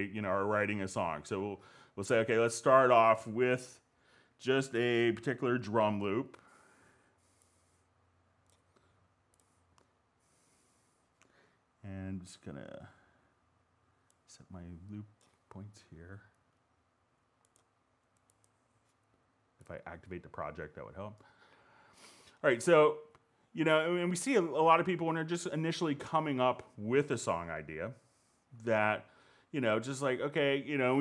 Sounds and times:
Speech: 0.0 - 3.8, 4.4 - 6.4, 11.8 - 13.0, 14.3 - 16.3, 19.6 - 21.2, 22.4 - 28.0, 28.6 - 31.0.

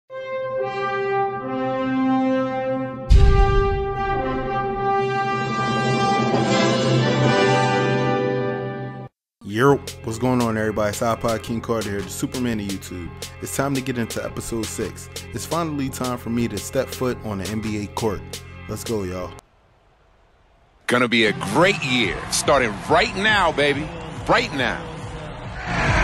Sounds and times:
Trombone: 0.1 - 8.9.

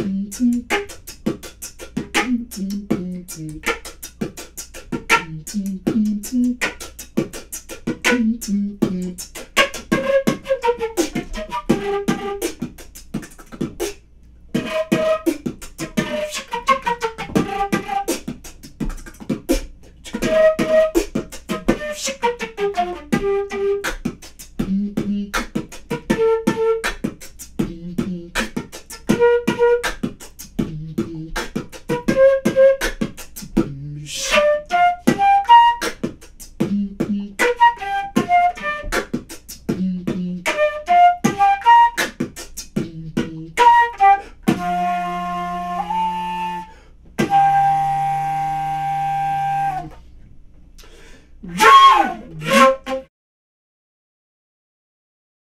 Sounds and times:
Beatboxing: 0.0 - 47.6, 50.8 - 53.1
Inside, small room: 0.0 - 53.1
Flute: 5.1 - 5.7, 8.0 - 12.7, 14.6 - 18.4, 20.1 - 24.2, 25.6 - 27.1, 28.4 - 30.2, 31.5 - 33.2, 34.1 - 36.2, 37.4 - 39.2, 40.4 - 42.5, 43.3 - 50.0, 51.5 - 53.1.

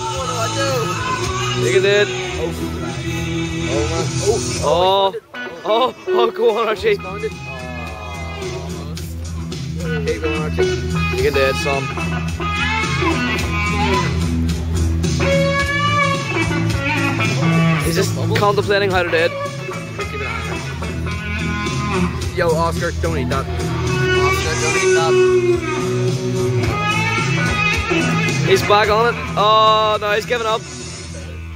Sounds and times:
Music: 0.0 - 31.5.

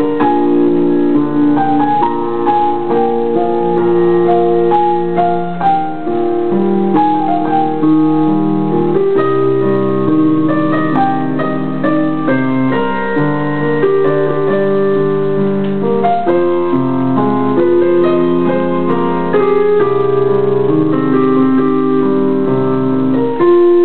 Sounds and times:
Music: 0.0 - 23.8.

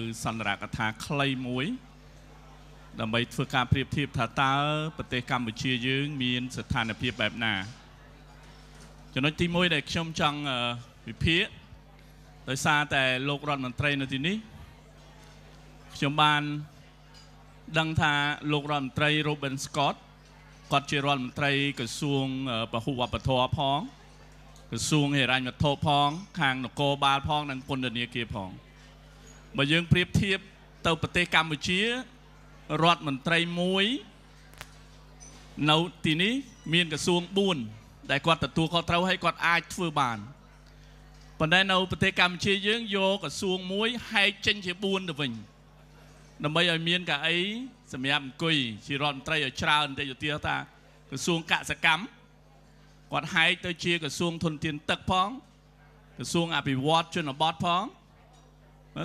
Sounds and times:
Male speech, man speaking: 0.0 - 1.8, 3.0 - 7.8, 9.2 - 11.7, 12.5 - 14.5, 16.0 - 16.7, 17.7 - 20.0, 20.7 - 24.0, 24.7 - 28.6, 29.6 - 34.1, 35.6 - 40.4, 41.4 - 45.5, 46.4 - 52.2, 53.1 - 55.5, 56.2 - 58.0
Narration, monologue: 0.0 - 2.2.

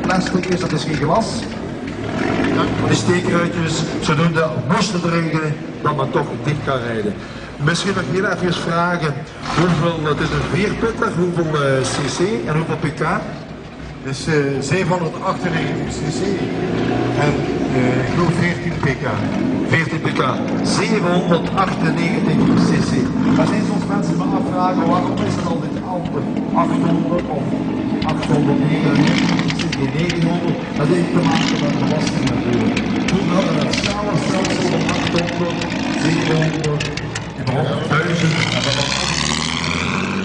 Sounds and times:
Speech: 0.0 - 1.6, 2.5 - 16.5, 17.2 - 39.2
Car: 0.0 - 40.2.

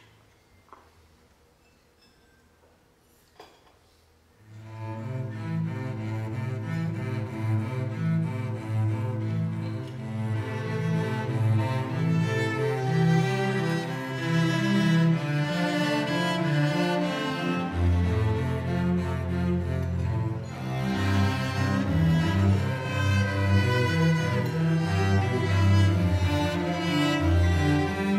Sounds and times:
Cello: 4.4 - 28.1.

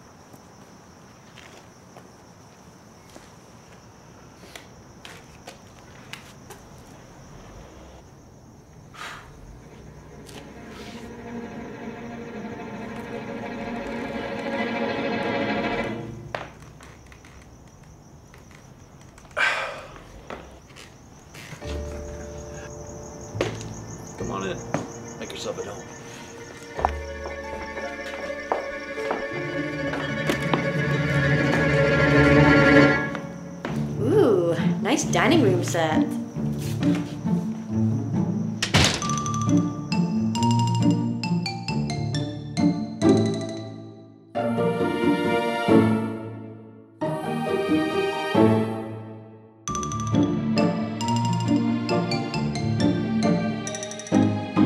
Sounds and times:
Music: 9.8 - 16.6, 21.6 - 54.6
Speech: 34.0 - 36.1.

